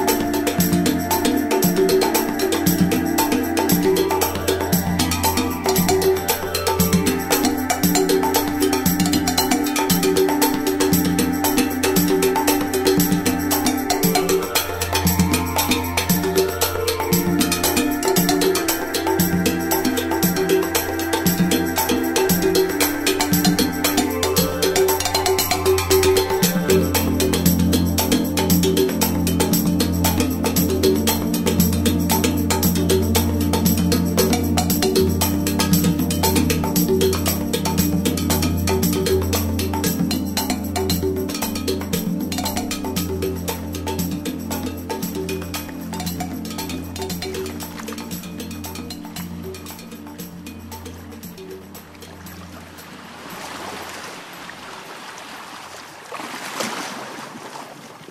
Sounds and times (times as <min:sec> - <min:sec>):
Music: 0:00.0 - 0:54.4.